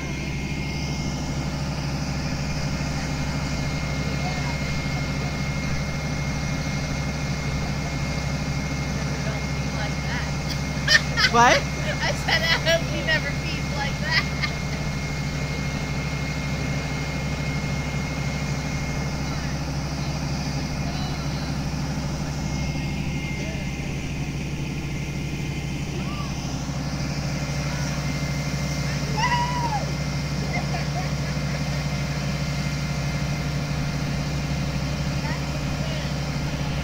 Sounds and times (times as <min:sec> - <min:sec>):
Heavy engine (low frequency): 0:00.0 - 0:36.8
Truck: 0:00.0 - 0:36.8.